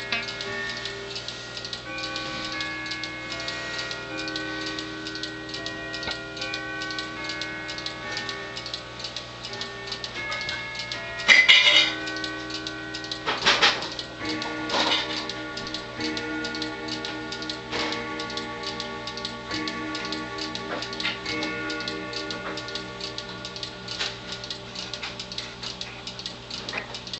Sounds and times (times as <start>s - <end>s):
Tick-tock: 0.0s - 27.2s
Tick: 13.9s - 27.2s.